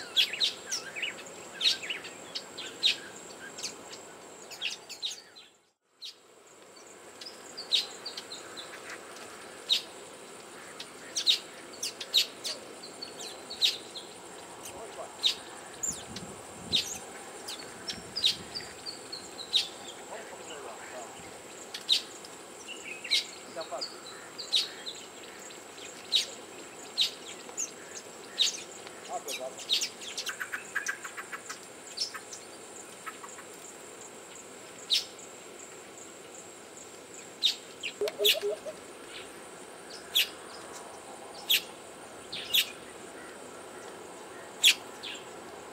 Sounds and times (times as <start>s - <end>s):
Bee, wasp, etc.: 0.0s - 45.7s
Fly, housefly: 0.0s - 45.7s.